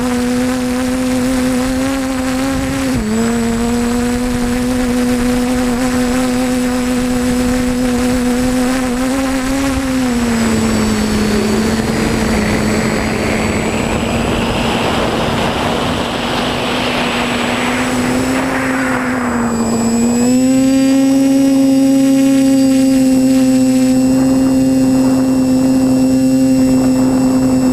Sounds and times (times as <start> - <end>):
Aircraft: 0.0 - 27.7
Outside, urban or manmade: 0.0 - 27.7.